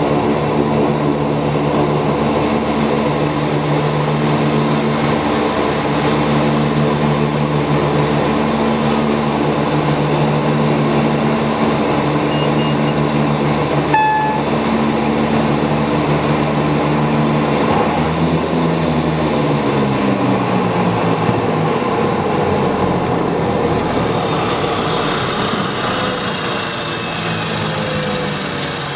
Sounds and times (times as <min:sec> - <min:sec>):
Fixed-wing aircraft, airplane: 0:00.0 - 0:28.9.